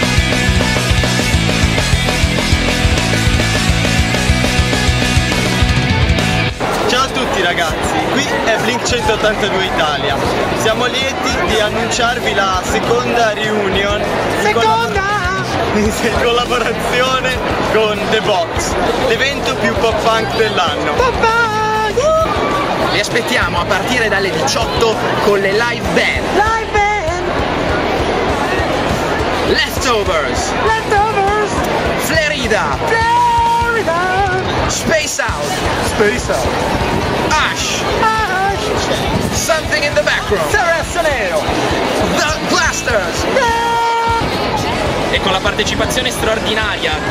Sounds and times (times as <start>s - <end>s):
Music: 0.0s - 47.1s
Speech: 6.7s - 47.1s.